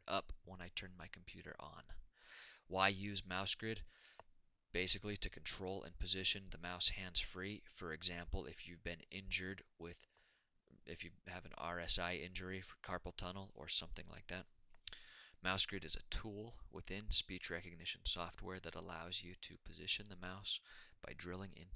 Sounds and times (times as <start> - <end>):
Speech: 0.0 - 2.0, 2.7 - 3.9, 4.8 - 10.1, 10.8 - 14.5, 15.4 - 21.7.